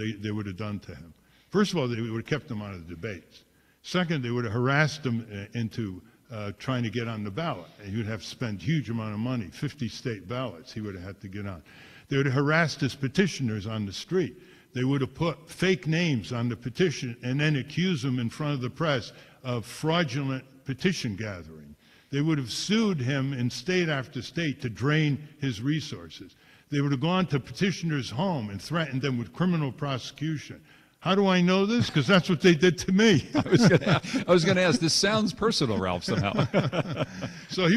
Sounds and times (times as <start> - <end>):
Speech: 0.0 - 37.7.